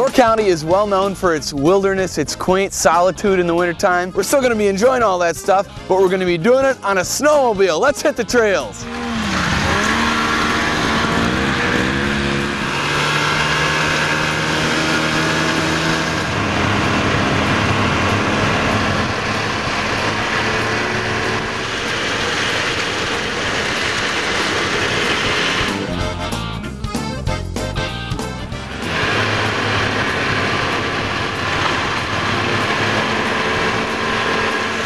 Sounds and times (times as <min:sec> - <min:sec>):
Music: 0:00.0 - 0:13.8, 0:14.6 - 0:34.8
Vehicle: 0:08.6 - 0:34.8.